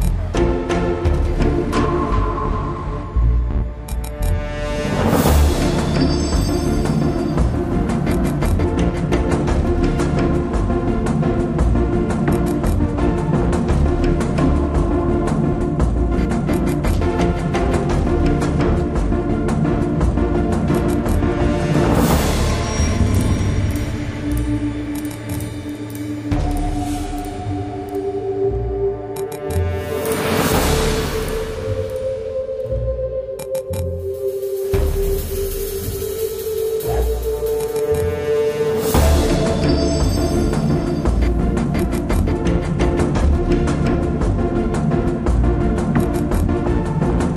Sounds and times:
Music: 0.0 - 47.3.

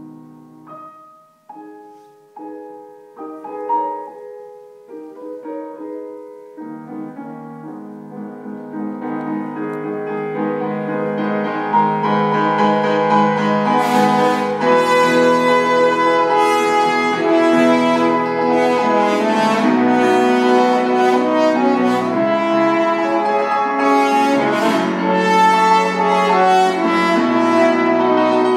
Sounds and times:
Orchestra: 0.0 - 28.5
Piano: 0.0 - 28.5
French horn: 12.3 - 28.5.

